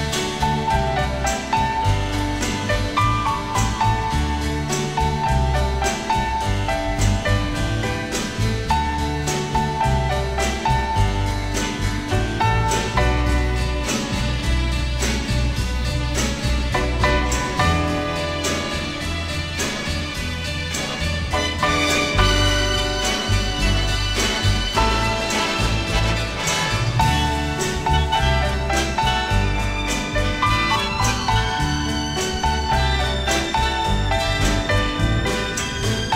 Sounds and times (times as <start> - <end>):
Music: 0.0 - 36.1.